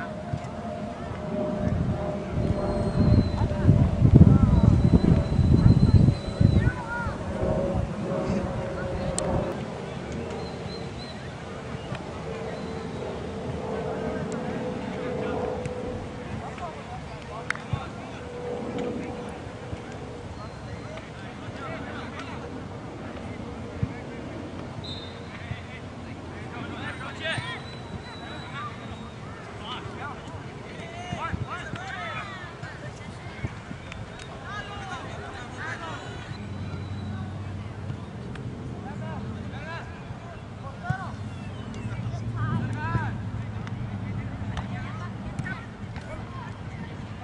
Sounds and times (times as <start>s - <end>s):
Speech: 0.0s - 10.3s, 13.7s - 24.7s, 25.3s - 47.2s.